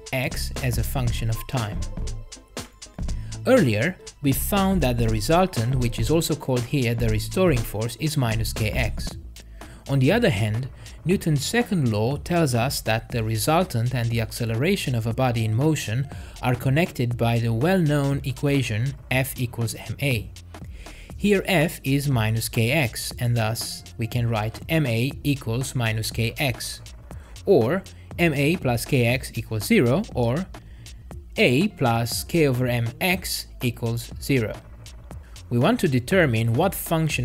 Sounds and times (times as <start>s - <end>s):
Speech: 0.0s - 1.9s, 3.4s - 9.2s, 9.9s - 20.3s, 21.2s - 26.9s, 27.5s - 30.5s, 31.4s - 34.6s, 35.5s - 37.2s
Music: 0.0s - 37.2s.